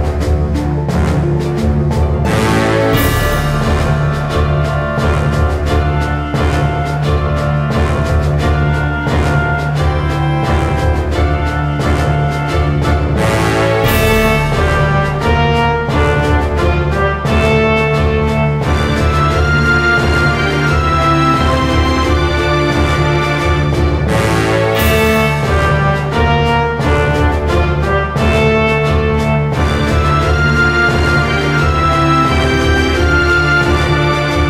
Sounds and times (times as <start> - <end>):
Music: 0.0 - 34.5.